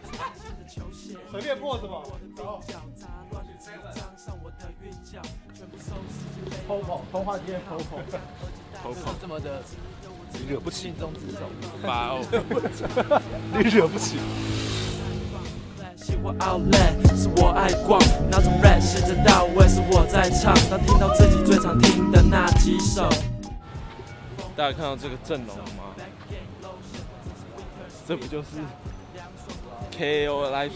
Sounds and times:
Music: 0.0s - 30.7s
Speech: 1.3s - 2.1s, 6.6s - 12.6s, 13.5s - 14.3s, 24.4s - 26.2s, 26.9s - 28.8s, 29.6s - 30.7s.

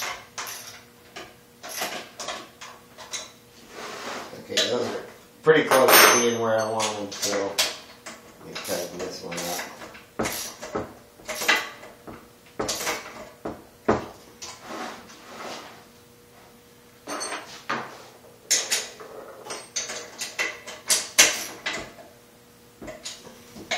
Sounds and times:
Speech: 4.3s - 7.6s, 8.4s - 9.7s.

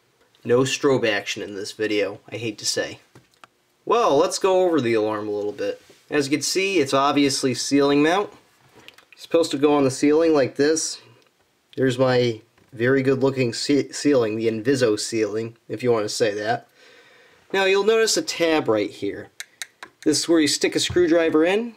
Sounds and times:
Speech: 0.4s - 3.1s, 3.9s - 8.4s, 9.2s - 11.2s, 11.8s - 16.7s, 17.5s - 19.4s, 20.0s - 21.7s.

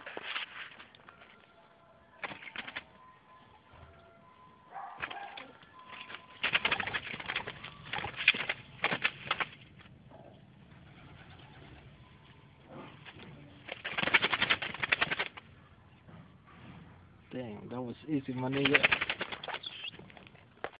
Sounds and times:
Pigeon, dove: 2.2s - 3.0s, 3.6s - 15.8s, 18.3s - 20.4s
Outside, rural or natural: 4.7s - 15.5s, 18.0s - 20.8s
Speech: 17.3s - 18.9s.

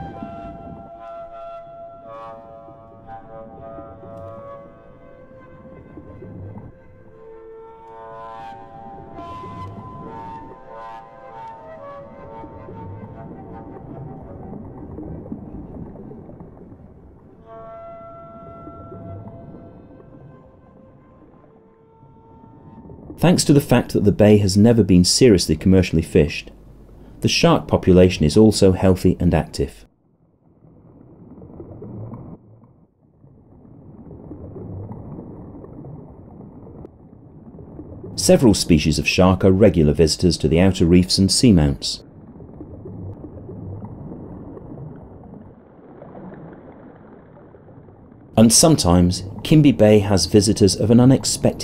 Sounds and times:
Music: 0.0s - 14.6s, 17.4s - 23.1s.

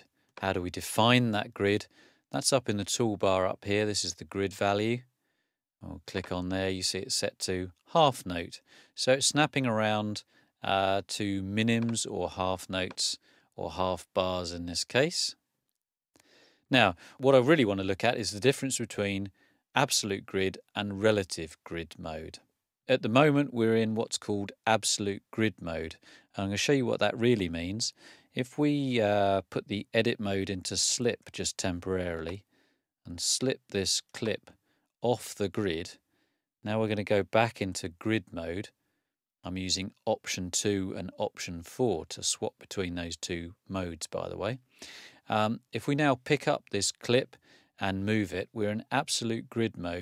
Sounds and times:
Speech: 0.0s - 5.1s, 5.8s - 15.4s, 16.7s - 32.4s, 33.1s - 36.0s, 36.6s - 38.8s, 39.4s - 44.6s, 45.3s - 50.0s.

